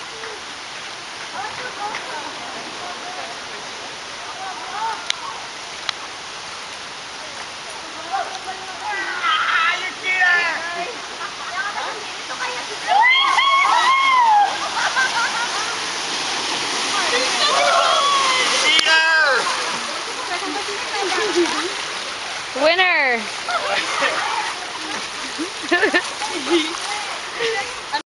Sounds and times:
Stream: 0:00.0 - 0:28.0.

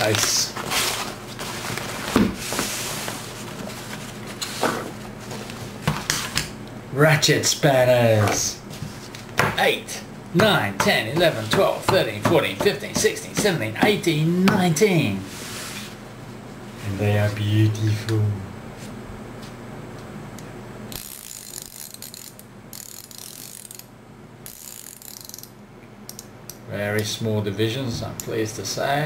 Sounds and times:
Ratchet, pawl: 0:21.0 - 0:23.8, 0:24.5 - 0:25.5.

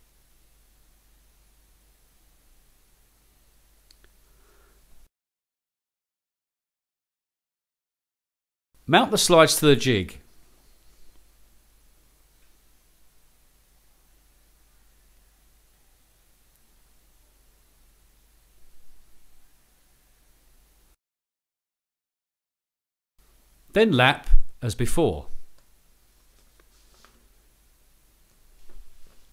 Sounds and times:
Silence: 0:00.0 - 0:05.1, 0:10.2 - 0:21.0
Speech: 0:08.9 - 0:10.3, 0:23.7 - 0:25.5.

